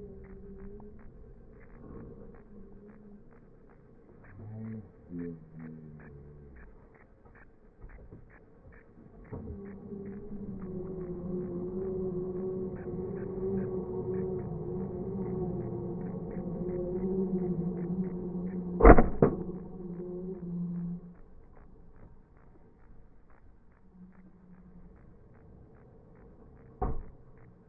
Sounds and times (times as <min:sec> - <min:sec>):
Truck: 0:09.2 - 0:21.1.